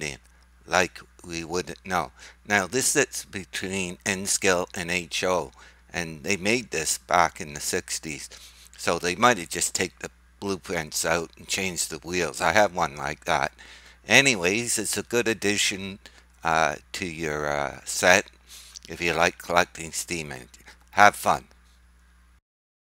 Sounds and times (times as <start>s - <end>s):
Speech: 0.0s - 21.5s.